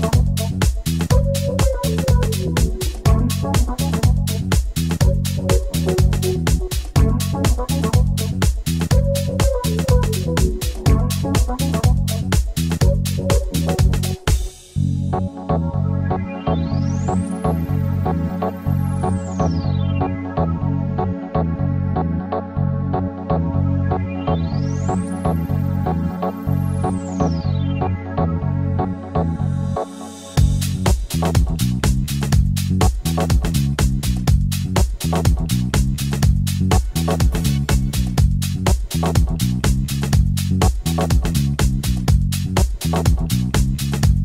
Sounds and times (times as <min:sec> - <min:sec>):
Synthesizer: 0:00.0 - 0:44.2.